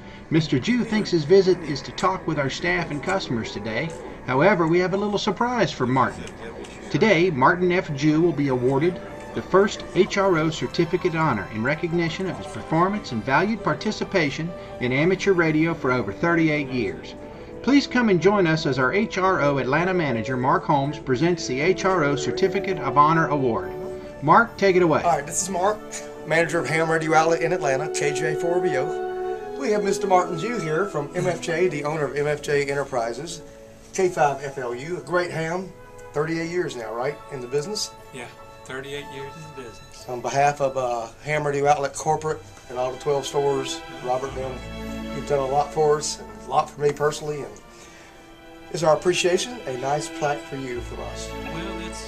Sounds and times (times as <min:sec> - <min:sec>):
Music: 0:00.0 - 0:52.0
Speech: 0:00.3 - 0:29.0, 0:29.6 - 0:33.4, 0:34.0 - 0:47.6, 0:48.8 - 0:52.0.